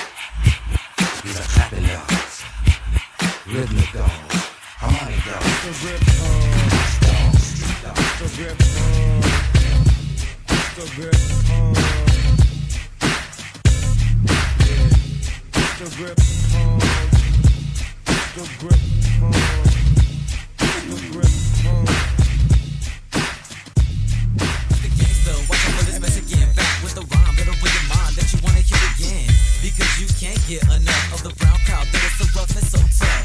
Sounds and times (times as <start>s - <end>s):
Music: 0.0s - 33.2s.